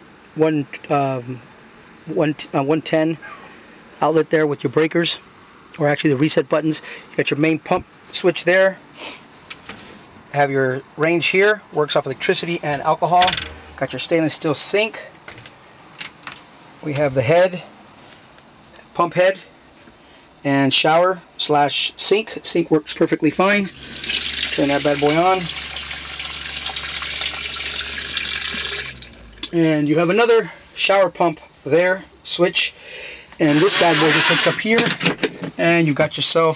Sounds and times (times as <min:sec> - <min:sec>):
Speech: 0:00.4 - 0:01.4, 0:02.1 - 0:03.4, 0:04.0 - 0:05.2, 0:05.8 - 0:08.8, 0:10.3 - 0:15.1, 0:16.8 - 0:17.7, 0:19.0 - 0:19.5, 0:20.4 - 0:23.7, 0:24.6 - 0:25.5, 0:29.5 - 0:32.8, 0:33.4 - 0:36.5.